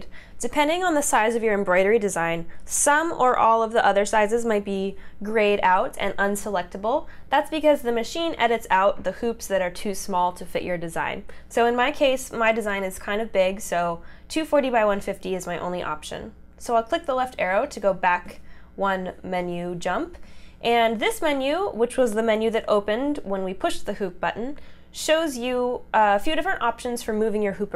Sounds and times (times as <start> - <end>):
Speech: 0.0 - 27.7.